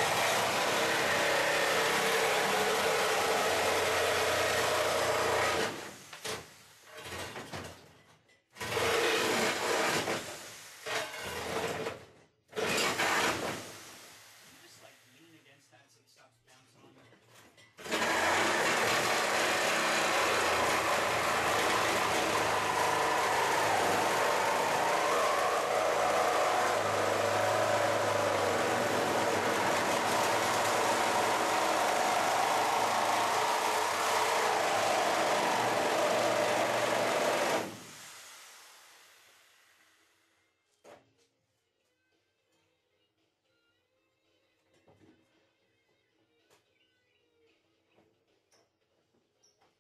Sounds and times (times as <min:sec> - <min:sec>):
Speech: 0:14.6 - 0:17.2.